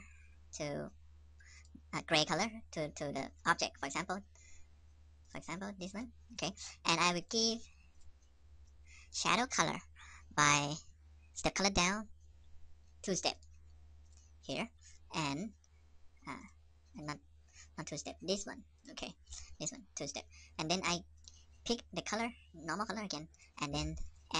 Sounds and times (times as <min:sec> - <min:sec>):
Speech: 0:00.6 - 0:00.9, 0:01.9 - 0:04.2, 0:05.3 - 0:07.6, 0:09.1 - 0:10.8, 0:11.4 - 0:12.1, 0:13.1 - 0:13.4, 0:14.5 - 0:15.5, 0:17.0 - 0:17.2, 0:17.8 - 0:21.0, 0:21.7 - 0:24.3.